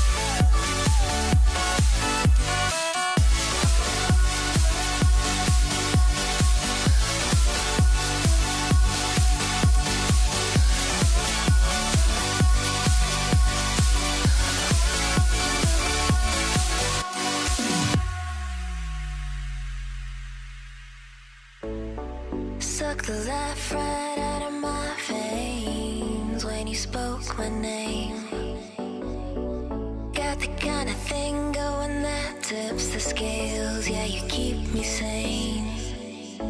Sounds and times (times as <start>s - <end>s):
Music: 0.0s - 36.5s.